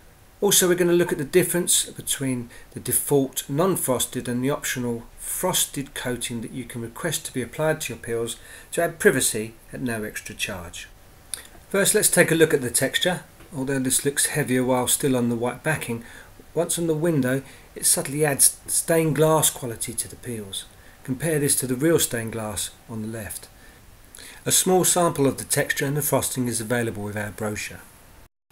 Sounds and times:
Speech: 0.4s - 11.0s, 11.7s - 16.0s, 16.6s - 23.5s, 24.4s - 27.9s.

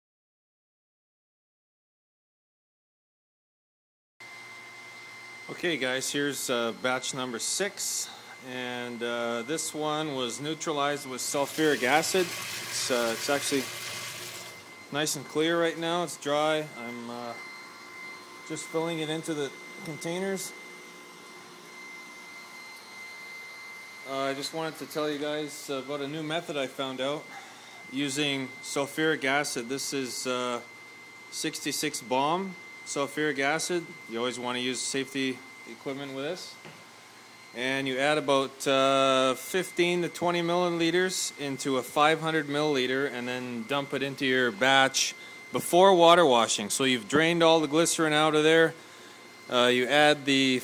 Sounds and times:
Speech: 5.5s - 13.7s, 14.9s - 17.4s, 18.5s - 20.6s, 24.1s - 27.3s, 27.9s - 30.7s, 31.3s - 36.6s, 37.6s - 48.8s, 49.5s - 50.6s
Boiling: 11.2s - 14.8s.

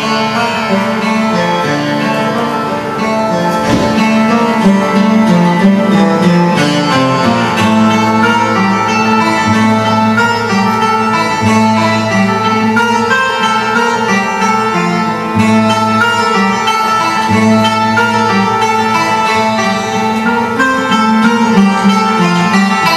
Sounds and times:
Acoustic guitar: 0.0s - 22.9s.

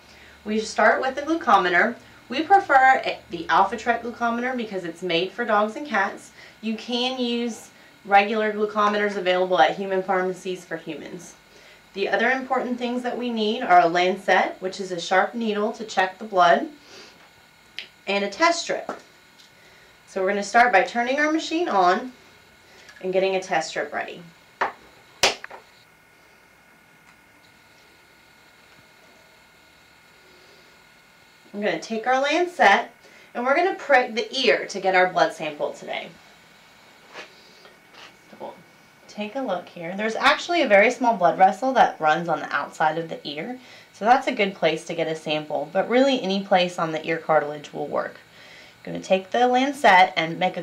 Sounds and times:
Speech: 0.5s - 11.4s, 12.0s - 16.8s, 18.1s - 19.0s, 20.1s - 22.2s, 23.0s - 24.3s, 31.5s - 36.2s, 38.3s - 48.2s, 48.8s - 50.6s.

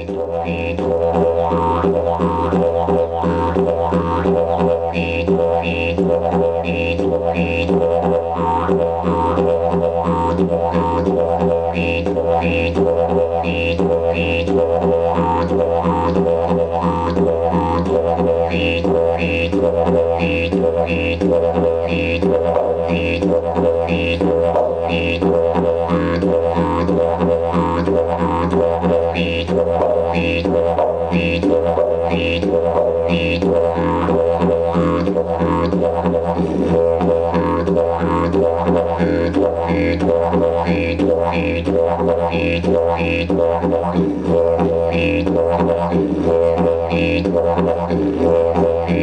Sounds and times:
Didgeridoo: 0.0s - 49.0s.

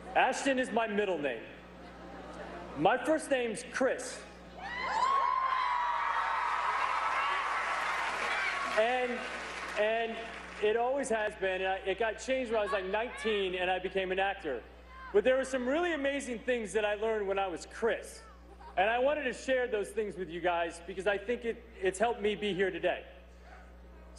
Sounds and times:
Narration, monologue: 0.0s - 1.8s, 2.7s - 4.6s, 8.8s - 24.1s
Male speech, man speaking: 0.2s - 1.6s, 2.8s - 4.3s, 8.8s - 9.2s, 9.8s - 14.6s, 15.2s - 18.2s, 18.8s - 23.1s.

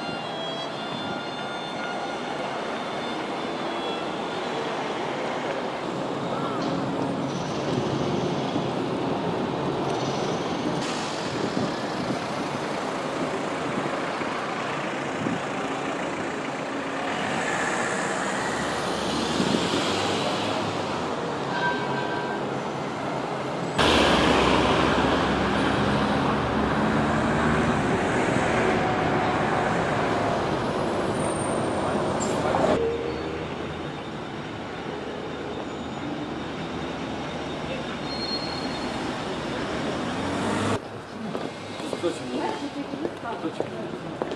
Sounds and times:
Bus: 0.0s - 44.3s.

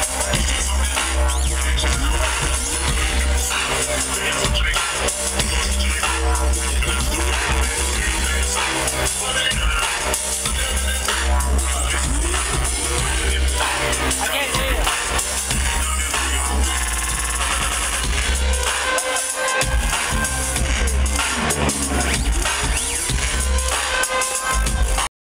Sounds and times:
Music: 0.0s - 25.1s.

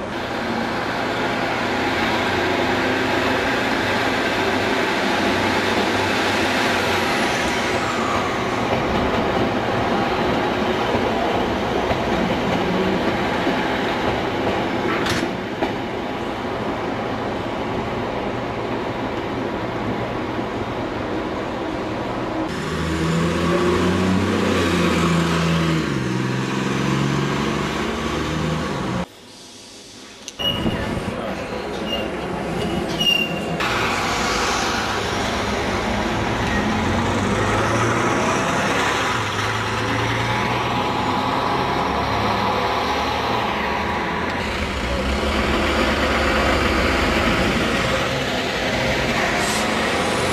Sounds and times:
Railroad car, train wagon: 0.0s - 50.3s
Subway, metro, underground: 0.0s - 50.3s
Train: 0.0s - 50.3s.

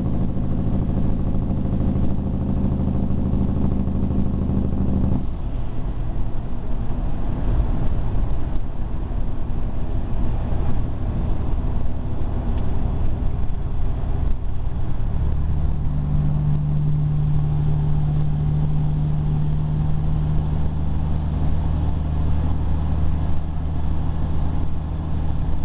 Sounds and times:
Outside, urban or manmade: 0.0s - 25.6s.

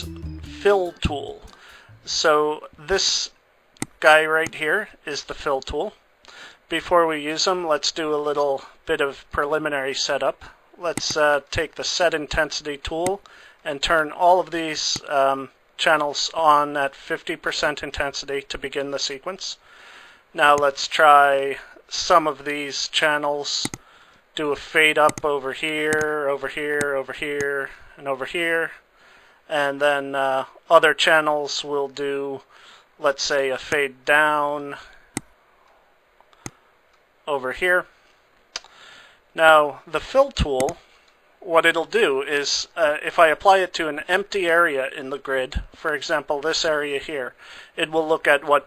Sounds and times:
Speech: 0.0s - 3.4s, 4.0s - 6.0s, 6.7s - 19.6s, 20.4s - 23.8s, 24.4s - 28.8s, 29.5s - 35.0s, 37.3s - 37.9s, 39.4s - 40.8s, 41.4s - 48.6s.

